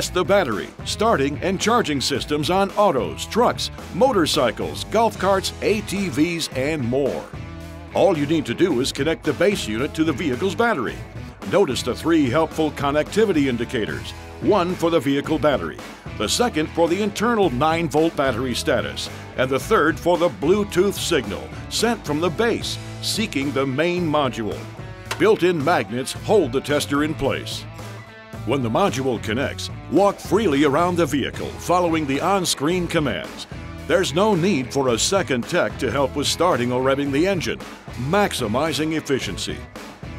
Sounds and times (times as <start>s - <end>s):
Speech: 0.0s - 7.3s, 7.9s - 27.6s, 28.5s - 39.7s
Music: 0.0s - 40.1s.